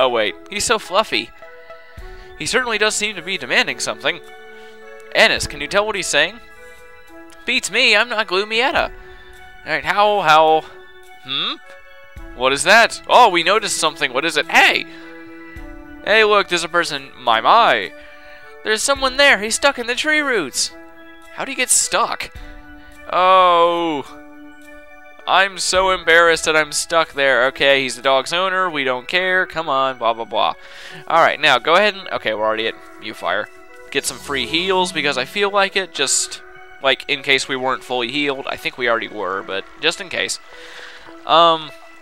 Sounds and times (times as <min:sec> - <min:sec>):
Speech: 0:00.0 - 0:01.3, 0:02.4 - 0:04.2, 0:05.1 - 0:06.4, 0:07.5 - 0:08.9, 0:09.7 - 0:10.7, 0:11.3 - 0:11.6, 0:12.4 - 0:14.8, 0:16.1 - 0:17.9, 0:18.7 - 0:20.8, 0:21.4 - 0:22.3, 0:23.1 - 0:24.1, 0:25.3 - 0:40.4, 0:41.3 - 0:41.7
Music: 0:00.0 - 0:42.0.